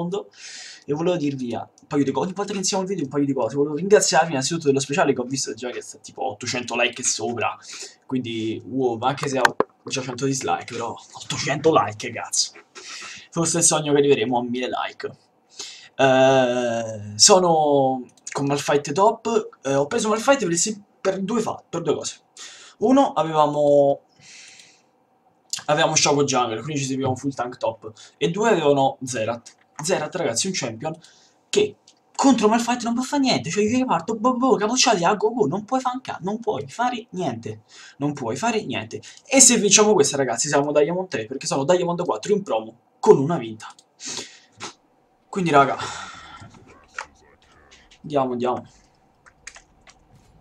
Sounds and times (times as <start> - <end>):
Speech: 0.0 - 15.2, 15.9 - 24.0, 25.5 - 43.9, 45.3 - 48.8.